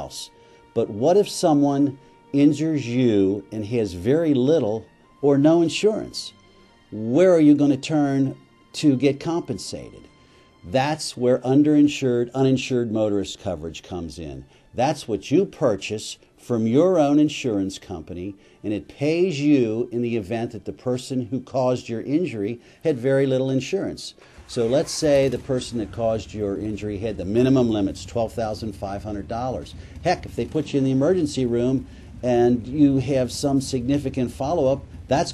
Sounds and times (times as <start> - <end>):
Speech: 0.0 - 6.4, 7.0 - 10.1, 10.7 - 35.3
Music: 0.0 - 35.3.